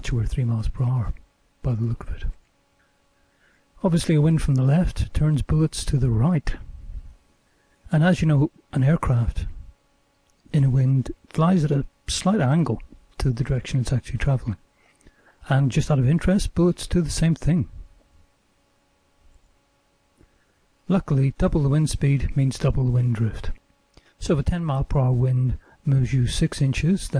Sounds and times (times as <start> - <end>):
Speech: 0.0 - 2.4, 3.8 - 6.7, 7.9 - 9.6, 10.5 - 14.6, 15.4 - 17.8, 20.9 - 23.6, 24.2 - 27.1.